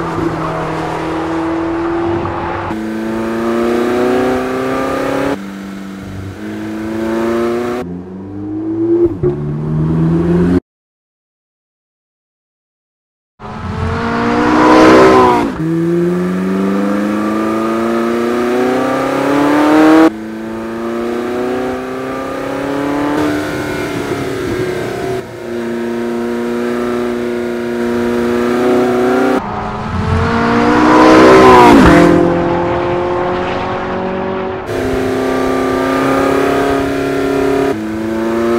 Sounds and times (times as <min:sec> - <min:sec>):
Race car, auto racing: 0:00.0 - 0:10.6, 0:13.4 - 0:38.5.